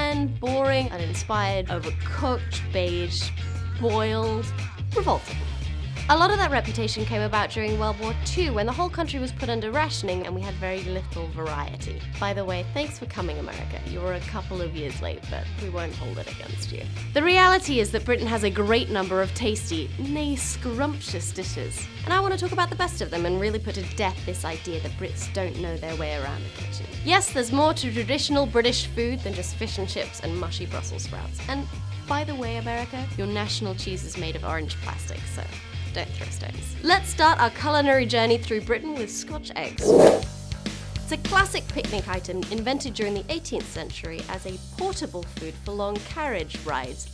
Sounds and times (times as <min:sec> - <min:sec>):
Speech: 0:00.0 - 0:05.3, 0:06.1 - 0:39.8, 0:41.1 - 0:47.1
Music: 0:00.0 - 0:47.1.